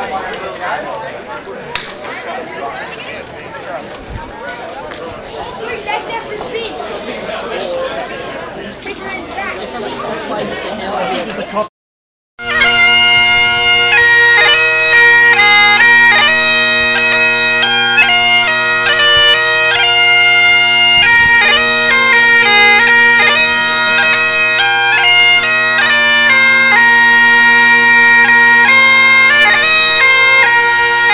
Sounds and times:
Speech: 0.0 - 11.7.

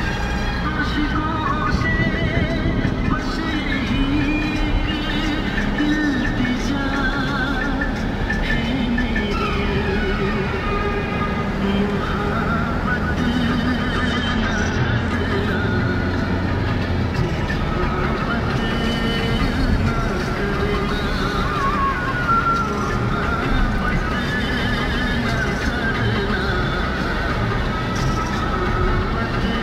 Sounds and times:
Music: 0.0 - 29.6.

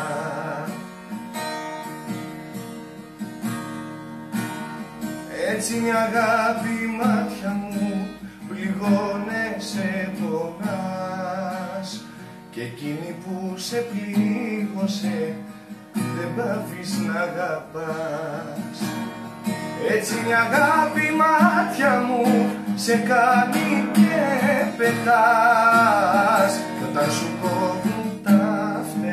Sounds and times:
Acoustic guitar: 0.0 - 29.1
Strum: 0.0 - 29.1.

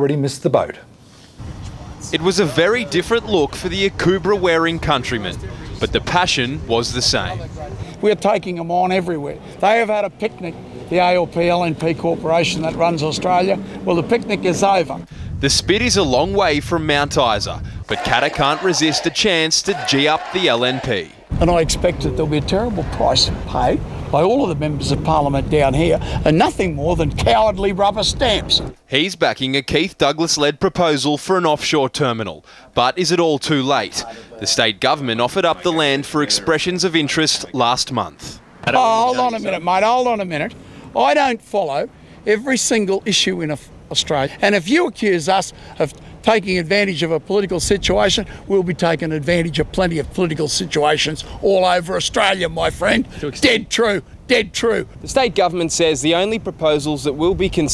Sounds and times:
Speech: 0.0 - 0.9, 1.8 - 57.7.

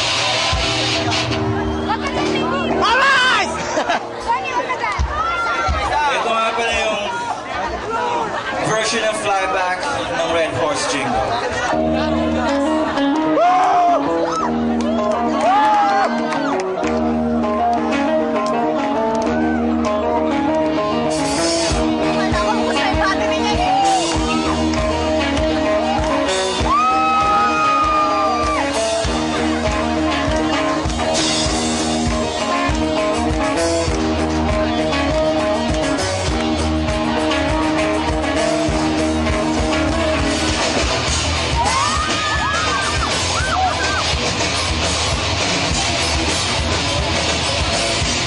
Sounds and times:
Music: 0.0 - 7.0, 8.6 - 48.2.

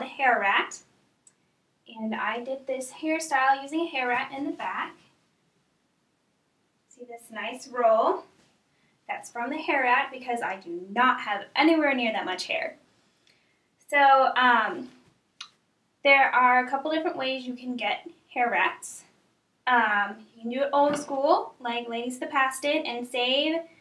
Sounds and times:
Speech: 0.0 - 0.9, 1.9 - 5.0, 7.0 - 8.3, 9.1 - 12.8, 13.9 - 15.0, 16.1 - 23.7.

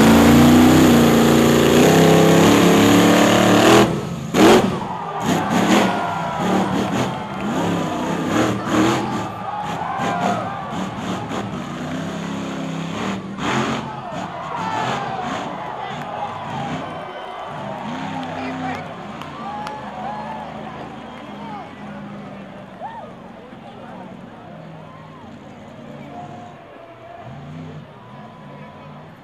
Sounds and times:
Speech: 18.1 - 19.0, 21.2 - 27.4, 28.0 - 29.2.

